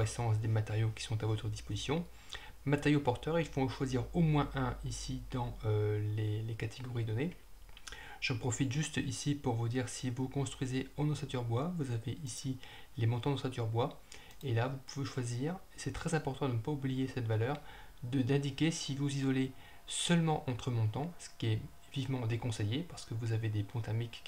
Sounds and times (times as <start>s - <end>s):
Speech: 0.0s - 7.4s, 8.2s - 24.2s.